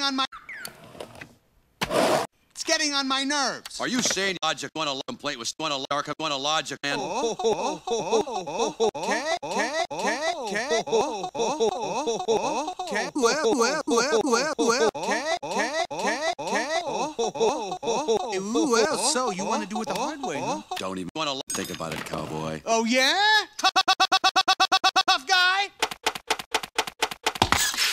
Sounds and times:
Speech: 2.6s - 7.1s, 18.3s - 23.6s, 25.0s - 25.8s.

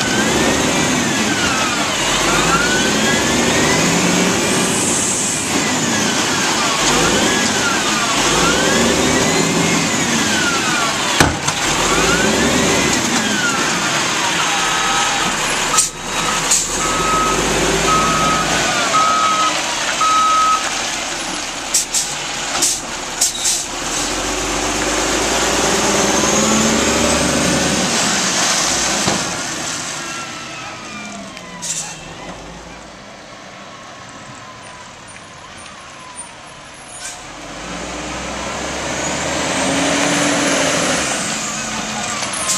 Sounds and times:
Truck: 0.0s - 42.5s.

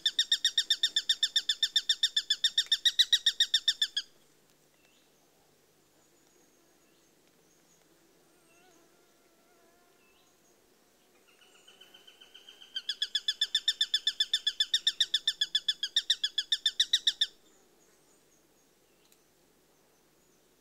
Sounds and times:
Chirp, tweet: 10.0s - 10.6s.

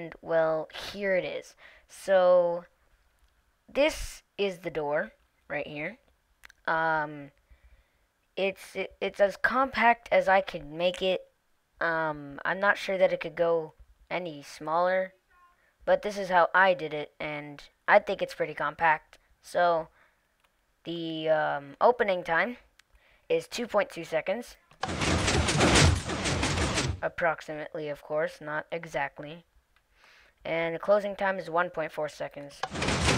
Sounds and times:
Speech: 0.0s - 2.7s, 3.7s - 6.0s, 6.6s - 7.4s, 8.4s - 20.0s, 20.8s - 22.7s, 23.3s - 24.8s, 27.0s - 29.5s, 30.4s - 32.7s.

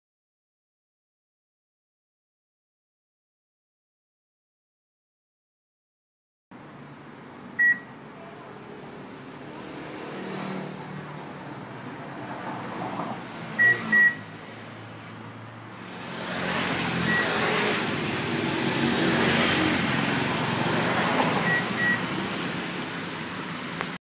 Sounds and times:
Beep, bleep: 7.6s - 7.9s, 13.6s - 14.3s, 17.1s - 17.5s, 21.5s - 22.0s.

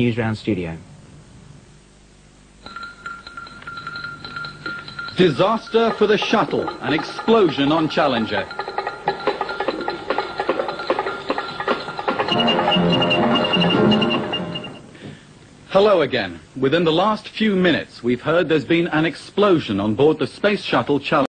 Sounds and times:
Speech: 0.0s - 0.9s, 5.2s - 8.5s, 15.7s - 21.3s
Music: 2.7s - 14.9s.

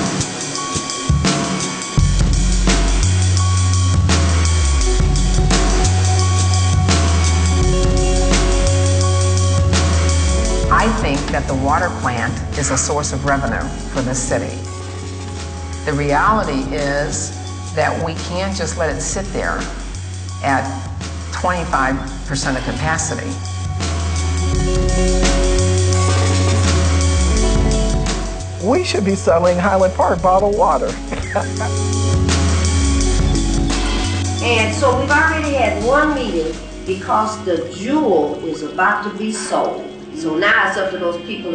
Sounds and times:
Music: 0.0s - 41.5s
Speech: 10.7s - 14.6s, 21.4s - 23.4s, 28.6s - 31.0s, 34.4s - 41.5s.

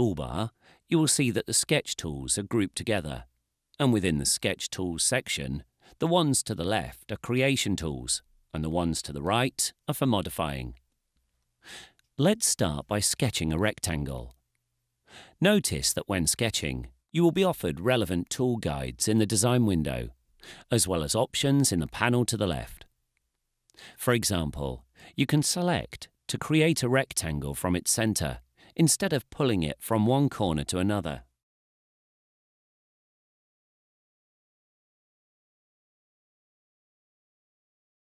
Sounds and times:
Speech: 0.0s - 10.8s, 12.2s - 14.4s, 15.4s - 22.9s, 24.0s - 31.3s.

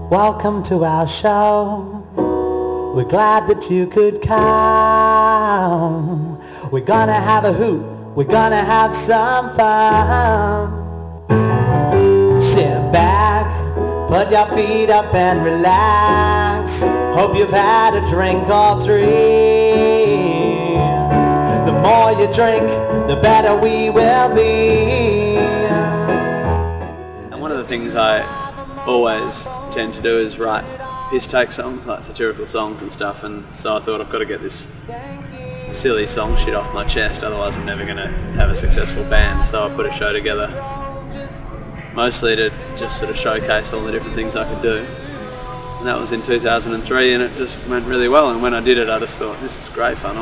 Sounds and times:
Blues: 0.0s - 31.5s
Rhythm and blues: 6.8s - 30.9s.

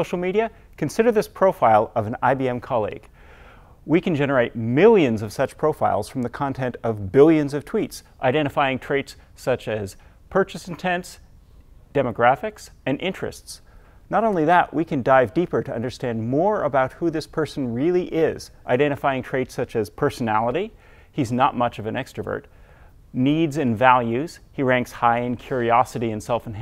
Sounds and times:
Speech: 0.0s - 3.1s, 3.9s - 11.2s, 11.9s - 22.5s, 23.1s - 26.6s.

